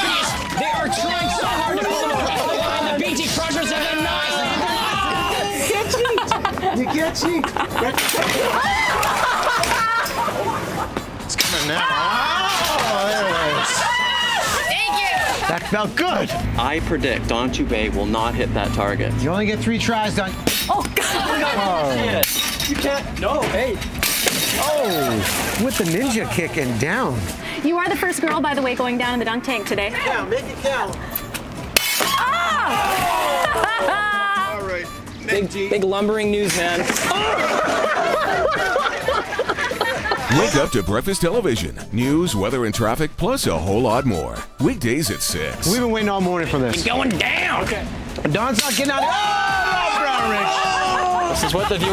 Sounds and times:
Music: 0.0 - 51.9.

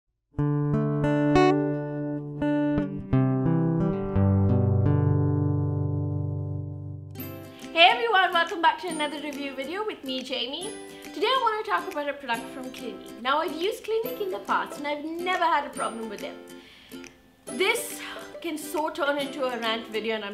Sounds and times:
Music: 0.3 - 20.3
Speech: 7.8 - 16.4, 17.5 - 20.3.

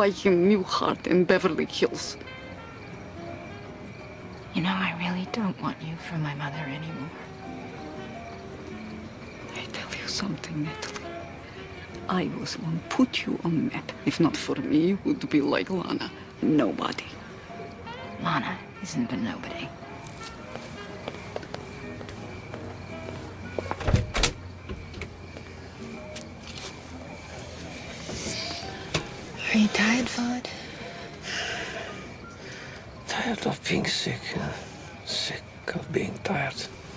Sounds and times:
Music: 0.0 - 36.9
Outside, urban or manmade: 0.0 - 36.9.

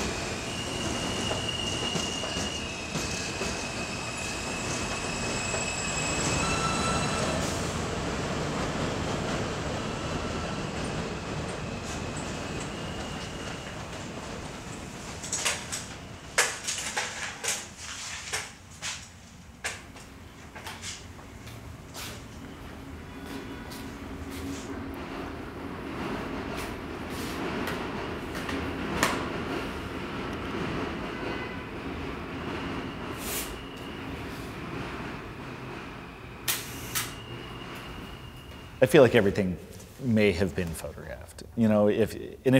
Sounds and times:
Outside, urban or manmade: 0.0 - 38.9.

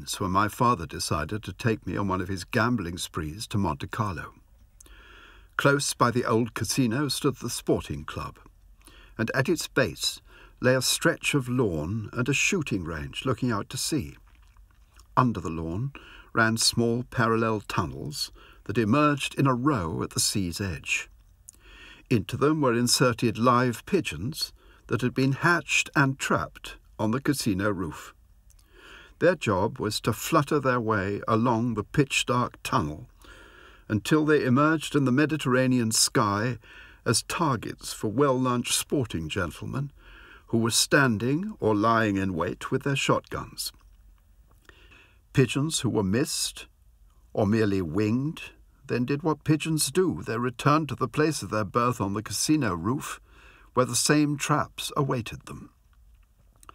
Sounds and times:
Speech: 0.0 - 4.4, 5.6 - 8.5, 9.2 - 14.2, 15.0 - 21.1, 22.1 - 28.2, 29.2 - 33.1, 33.9 - 43.8, 45.3 - 46.7, 47.3 - 53.2, 53.8 - 55.8.

